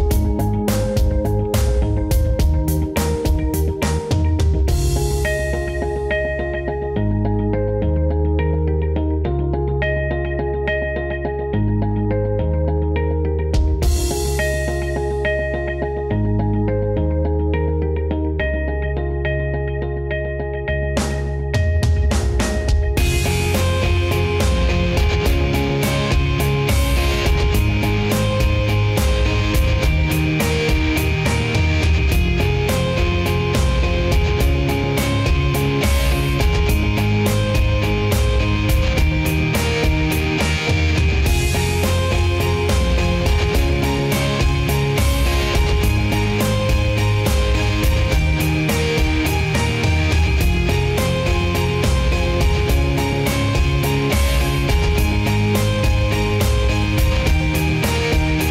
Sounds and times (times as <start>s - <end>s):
Music: 0.0s - 58.5s.